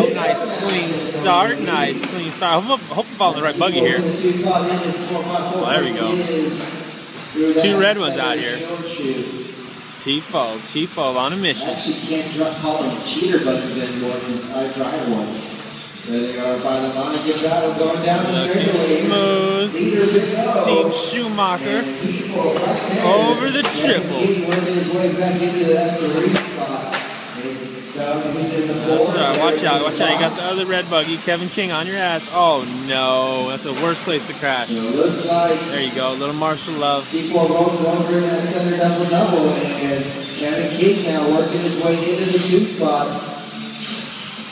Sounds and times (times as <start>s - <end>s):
Speech: 0.0s - 6.7s, 7.3s - 9.4s, 10.0s - 15.4s, 16.1s - 43.4s.